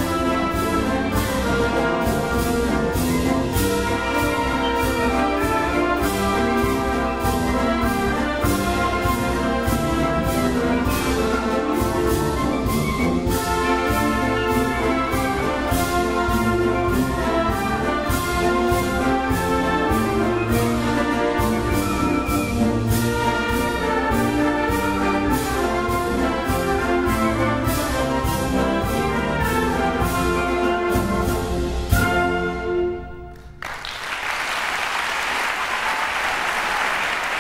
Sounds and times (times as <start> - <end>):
Classical music: 0.0 - 34.2
Orchestra: 0.0 - 37.4.